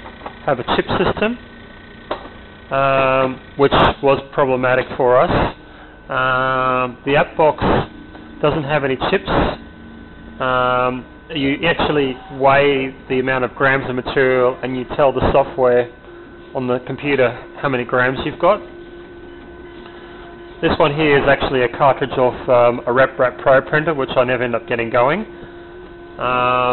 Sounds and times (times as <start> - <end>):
Printer: 0.0 - 26.7
Speech: 0.5 - 1.4, 2.7 - 9.6, 10.4 - 16.0, 16.6 - 18.7, 20.6 - 25.3, 26.2 - 26.7.